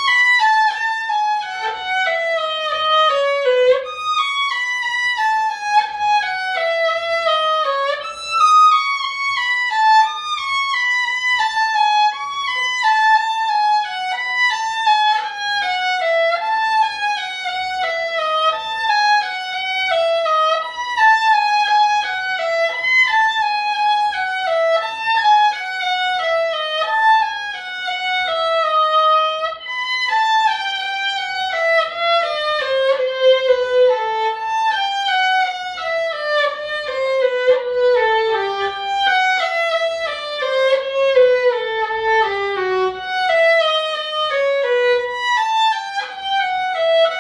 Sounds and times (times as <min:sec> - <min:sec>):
Violin, fiddle: 0:00.0 - 0:47.2.